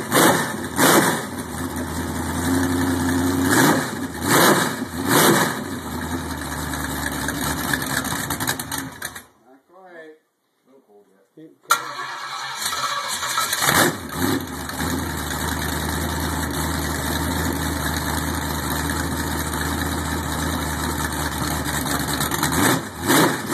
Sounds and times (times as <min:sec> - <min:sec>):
Accelerating, revving, vroom: 0:00.0 - 0:01.3, 0:03.3 - 0:05.6, 0:13.6 - 0:15.0, 0:22.4 - 0:23.5
Heavy engine (low frequency): 0:00.0 - 0:09.3, 0:12.7 - 0:23.5
Vehicle: 0:00.0 - 0:09.3, 0:11.7 - 0:23.5
Speech: 0:09.4 - 0:11.7
Engine starting: 0:11.7 - 0:14.4.